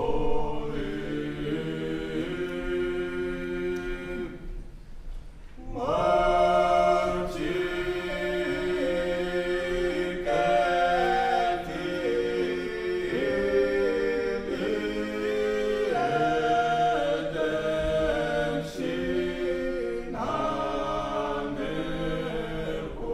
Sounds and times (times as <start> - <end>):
Choir: 0.0 - 4.8, 5.4 - 23.1.